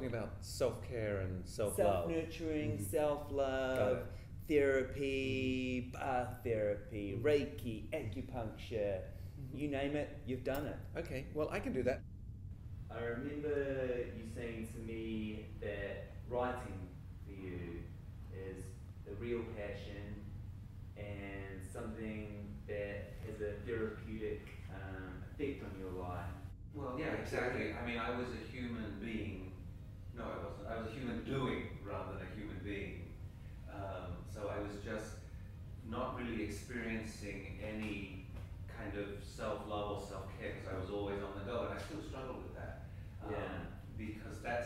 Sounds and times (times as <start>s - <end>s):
Speech: 0.0s - 12.0s, 12.9s - 20.3s, 21.0s - 44.6s.